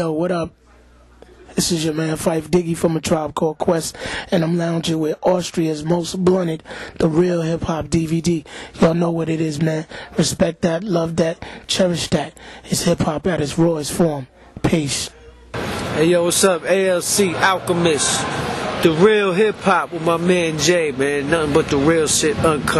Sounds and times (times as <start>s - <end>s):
Speech: 0.0s - 22.7s.